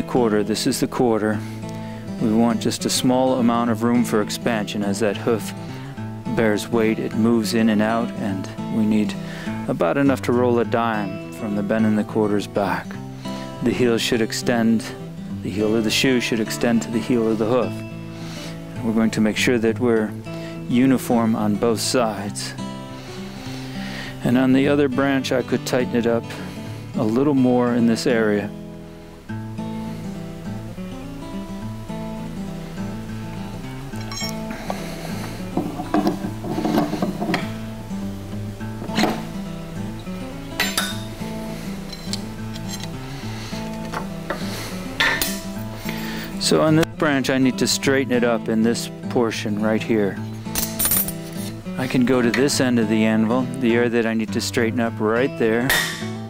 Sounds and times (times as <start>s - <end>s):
Music: 0.0s - 56.3s.